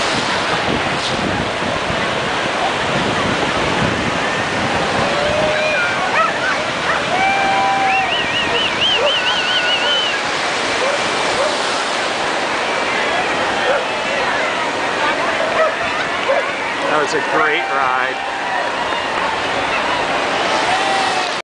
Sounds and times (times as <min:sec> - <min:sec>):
Waves, surf: 0:00.0 - 0:21.4
Bow-wow: 0:06.1 - 0:07.1, 0:09.0 - 0:10.1, 0:10.8 - 0:11.6, 0:15.5 - 0:16.5
Speech: 0:13.0 - 0:18.2.